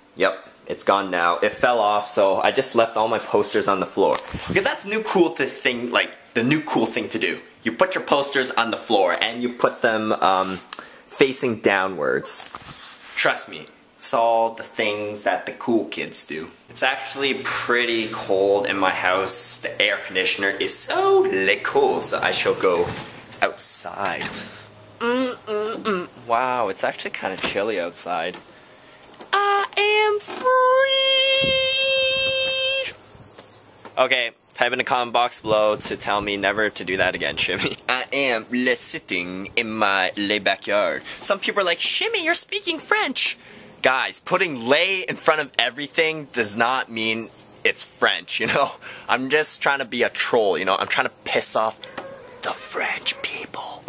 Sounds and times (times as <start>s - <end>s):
Speech: 0.2s - 12.5s, 13.2s - 24.4s, 25.1s - 28.4s, 29.4s - 33.0s, 34.0s - 53.8s.